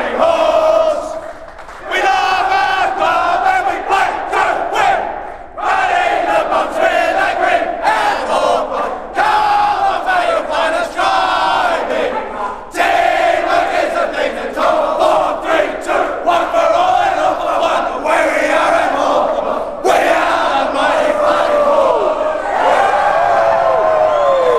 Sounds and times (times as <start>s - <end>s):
Crowd: 0.0s - 24.5s.